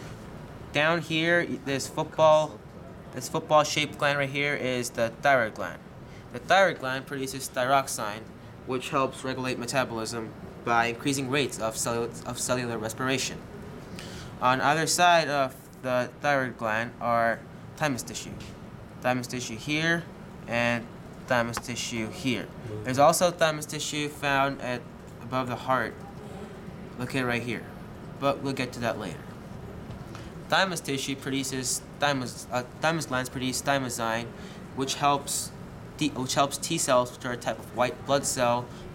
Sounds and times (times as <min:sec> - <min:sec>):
Speech: 0:00.7 - 0:13.4, 0:14.4 - 0:29.4, 0:30.5 - 0:38.7.